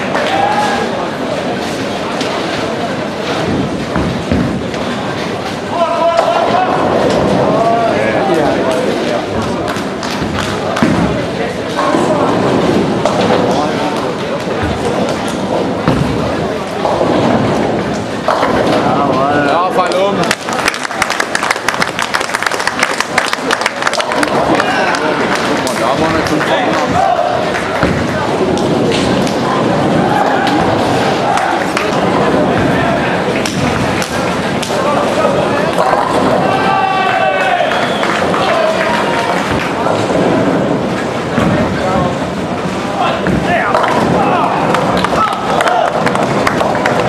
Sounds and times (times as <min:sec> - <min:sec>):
Thump, thud: 0:03.4 - 0:04.6, 0:15.8 - 0:16.3, 0:41.4 - 0:41.7.